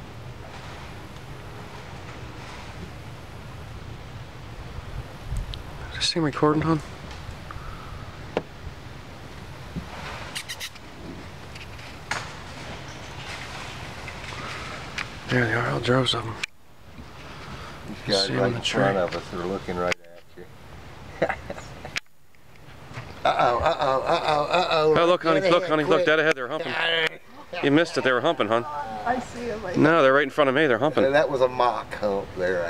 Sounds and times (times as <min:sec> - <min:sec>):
Outside, rural or natural: 0:00.0 - 0:32.6.